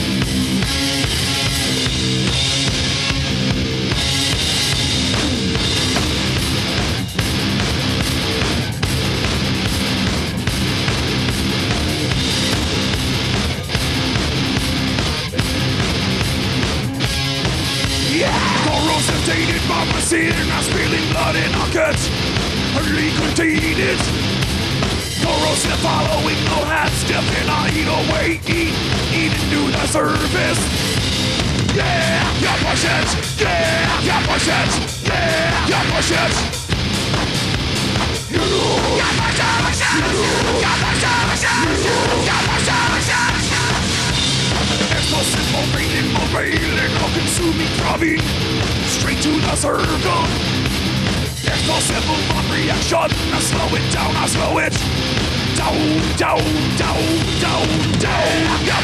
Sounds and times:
Music: 0:00.0 - 0:58.8.

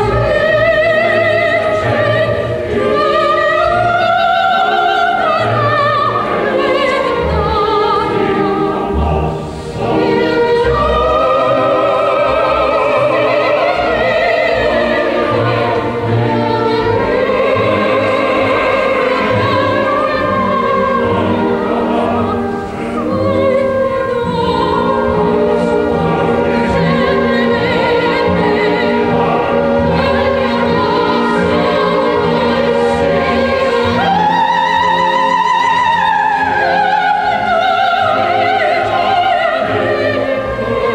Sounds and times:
Opera: 0:00.0 - 0:40.9.

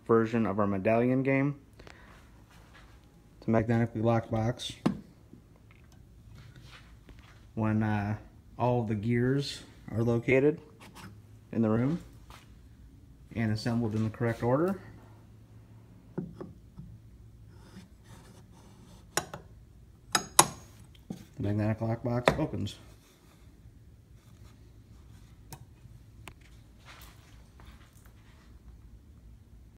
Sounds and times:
Speech: 0:00.0 - 0:01.6, 0:03.4 - 0:04.9, 0:07.6 - 0:10.7, 0:11.5 - 0:12.1, 0:13.3 - 0:14.9, 0:21.4 - 0:22.9.

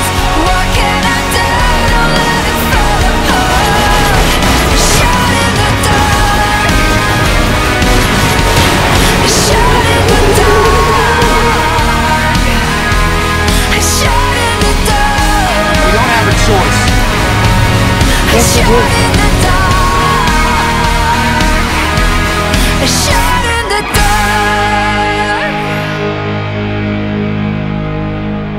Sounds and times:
Angry music: 0:00.0 - 0:28.5
Speech: 0:15.6 - 0:17.0, 0:18.2 - 0:19.4.

